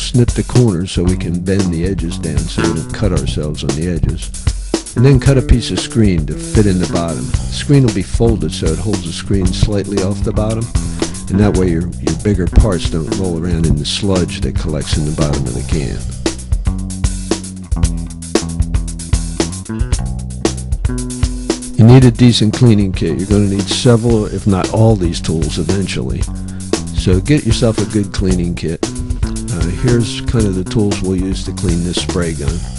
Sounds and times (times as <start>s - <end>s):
Speech: 0.0s - 4.3s, 5.0s - 16.1s, 21.8s - 26.3s, 26.9s - 28.9s, 29.5s - 32.7s
Music: 0.0s - 32.7s.